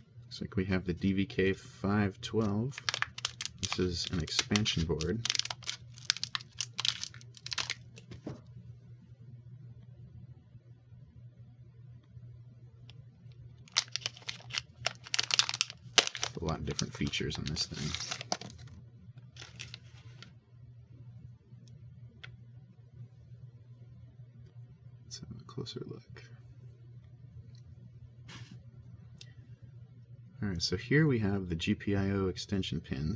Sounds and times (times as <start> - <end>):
Inside, small room: 0.0 - 33.1
Speech: 0.3 - 2.8, 3.6 - 5.3, 16.3 - 18.1, 25.0 - 26.4, 30.4 - 33.1.